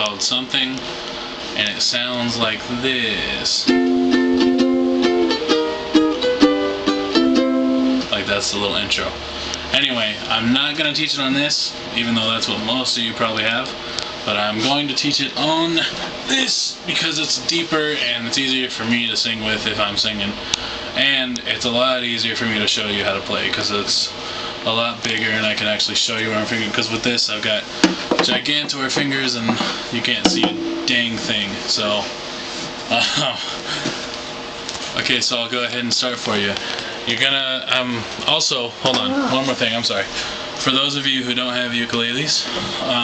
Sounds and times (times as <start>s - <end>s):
Speech: 0.0s - 0.9s, 1.6s - 3.8s, 8.0s - 32.2s, 32.9s - 33.5s, 34.9s - 43.0s.